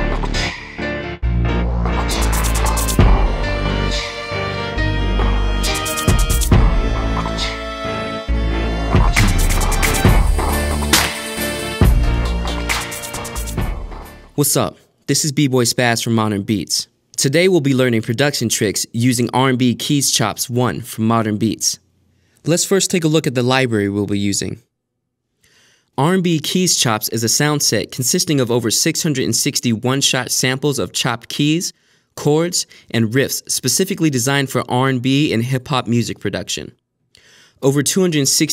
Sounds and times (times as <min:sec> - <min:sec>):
Music: 0:00.0 - 0:14.4
Speech: 0:14.4 - 0:21.8, 0:22.4 - 0:24.7, 0:26.0 - 0:36.8, 0:37.6 - 0:38.5.